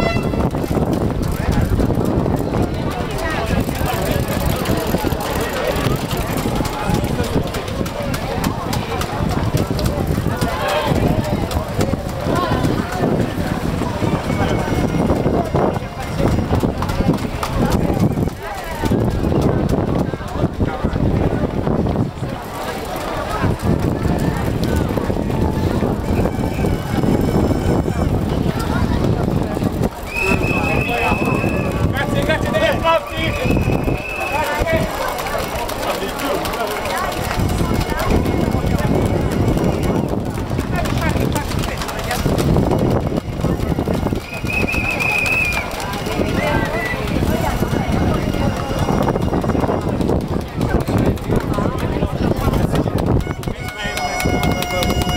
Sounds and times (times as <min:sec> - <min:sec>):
Outside, urban or manmade: 0:00.0 - 0:55.1
Run: 0:00.0 - 0:55.1
Speech: 0:01.2 - 0:55.1.